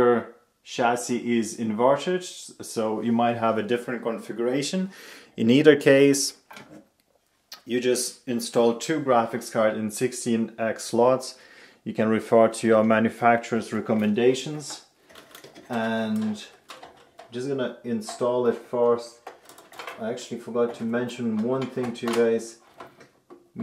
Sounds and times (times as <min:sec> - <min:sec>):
Speech: 0:00.0 - 0:06.4, 0:07.6 - 0:14.9, 0:15.7 - 0:16.6, 0:17.3 - 0:19.3, 0:19.9 - 0:22.6
Inside, small room: 0:00.0 - 0:23.6.